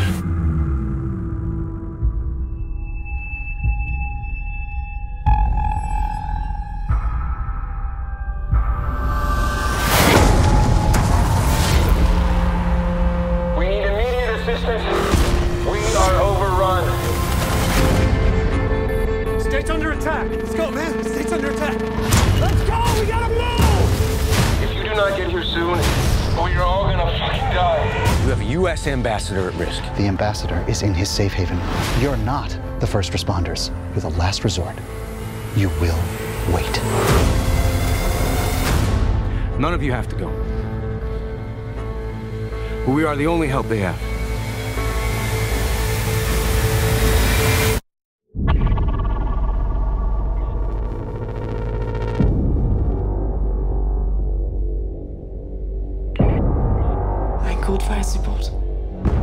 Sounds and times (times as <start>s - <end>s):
Music: 0.0s - 59.2s.